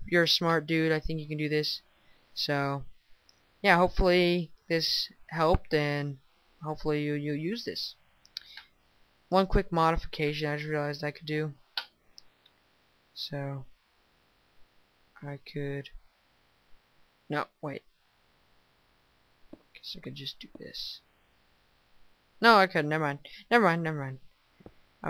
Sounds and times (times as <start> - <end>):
Narration, monologue: 0.0 - 25.0.